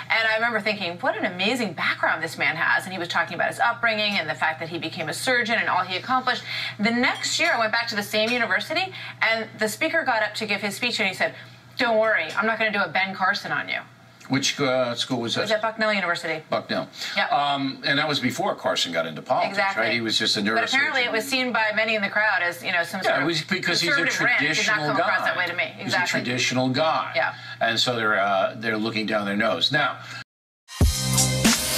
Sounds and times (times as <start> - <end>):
Female speech, woman speaking: 0.0 - 13.9, 15.4 - 16.4, 19.4 - 26.4
Conversation: 0.0 - 30.2
Male speech, man speaking: 14.3 - 15.6, 16.5 - 21.2, 23.0 - 30.0.